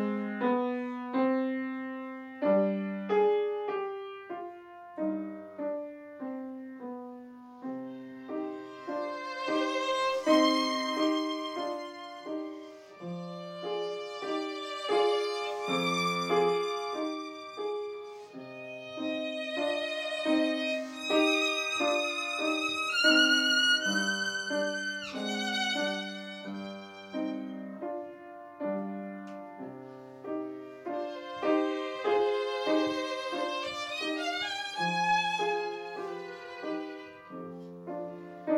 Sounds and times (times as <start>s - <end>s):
Violin, fiddle: 7.8s - 28.0s, 30.8s - 38.5s.